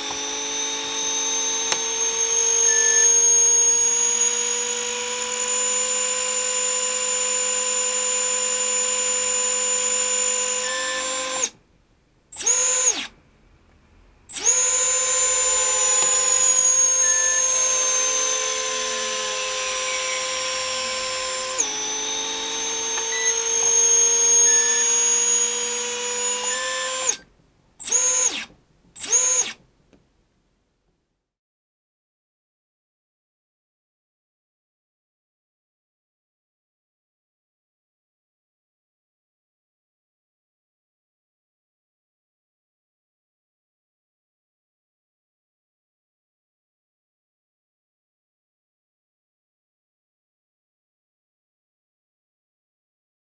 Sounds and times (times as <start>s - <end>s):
Inside, small room: 0.0s - 31.4s.